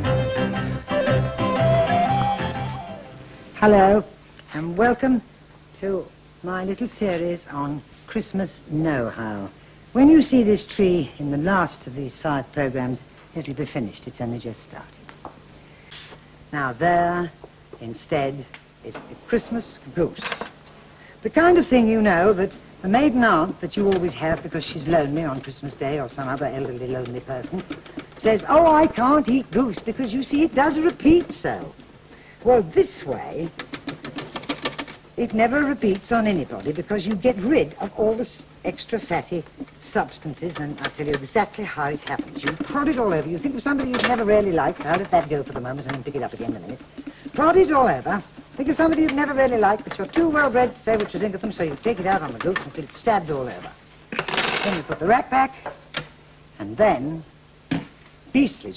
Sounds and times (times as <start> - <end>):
Speech: 3.6 - 15.0, 16.5 - 20.4, 21.2 - 31.8, 32.4 - 33.5, 35.2 - 53.8, 54.6 - 55.7, 56.6 - 57.3, 58.3 - 58.7.